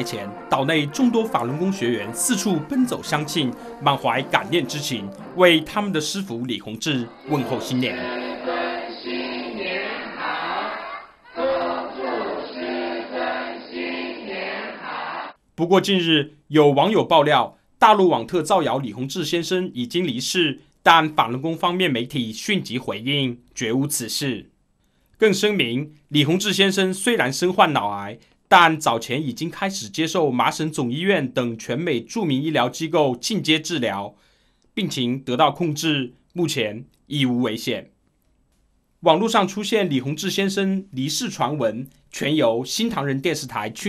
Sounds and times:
Speech: 0.0 - 8.2, 15.6 - 24.5, 25.2 - 34.2, 34.8 - 38.0, 39.0 - 43.8.

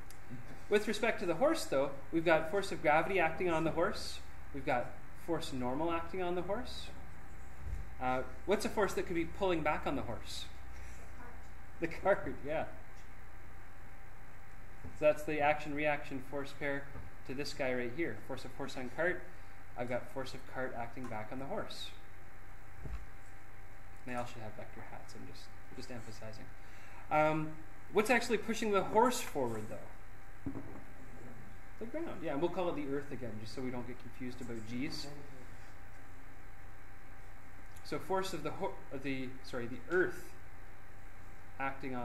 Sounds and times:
Speech: 0.7 - 7.0, 8.0 - 10.6, 11.2 - 12.8, 15.0 - 22.0, 24.1 - 26.5, 27.1 - 30.0, 31.8 - 35.5, 37.8 - 40.4, 41.6 - 42.0.

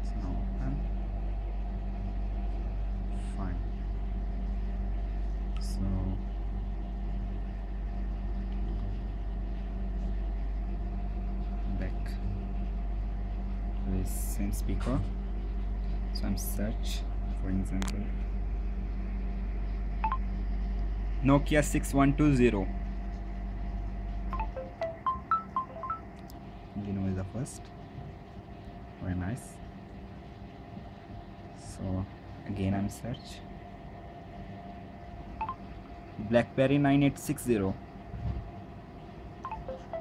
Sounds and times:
Male speech, man speaking: 0.0 - 0.9, 3.3 - 3.7, 5.6 - 6.2, 11.7 - 12.4, 13.9 - 15.1, 16.2 - 18.1, 21.2 - 22.7, 26.8 - 27.7, 29.0 - 29.6, 31.6 - 33.5, 36.2 - 37.8
Narration, monologue: 0.0 - 24.7, 25.3 - 38.1.

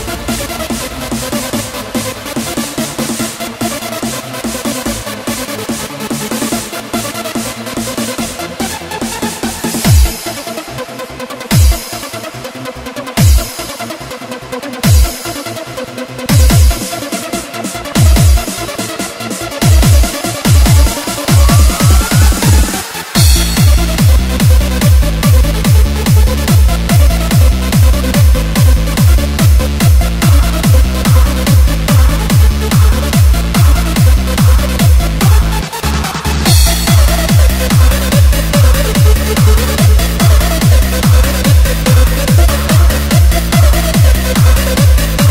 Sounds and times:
Techno: 0.0 - 45.3
Trance music: 0.0 - 45.3.

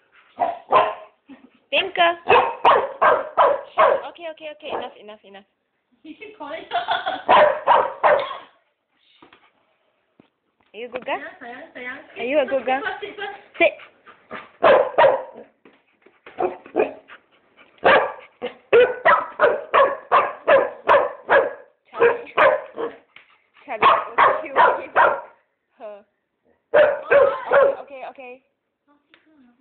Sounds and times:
Bow-wow: 0.4 - 1.2, 2.3 - 4.1, 7.3 - 8.4, 14.3 - 15.6, 16.4 - 17.1, 17.8 - 23.0, 23.8 - 25.4, 26.8 - 27.9
Speech: 4.0 - 5.5.

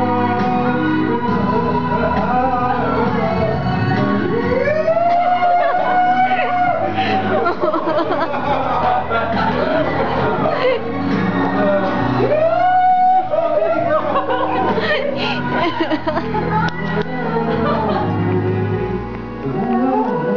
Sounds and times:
Male singing: 0.0 - 7.7, 8.4 - 16.2, 16.8 - 20.3
Music: 0.0 - 20.3.

